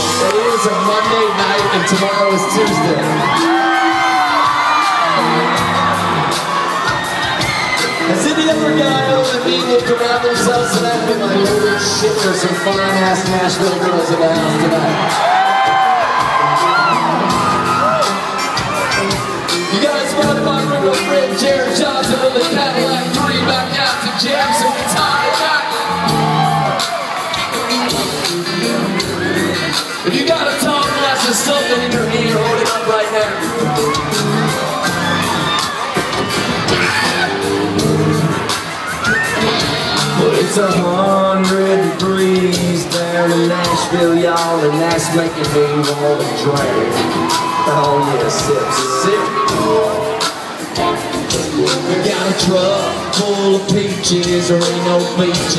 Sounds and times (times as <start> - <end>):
Music: 0.0 - 55.5
Speech: 0.2 - 3.1, 8.1 - 15.0, 19.7 - 25.7, 30.0 - 33.5, 40.2 - 46.9, 47.7 - 49.8, 51.8 - 55.5.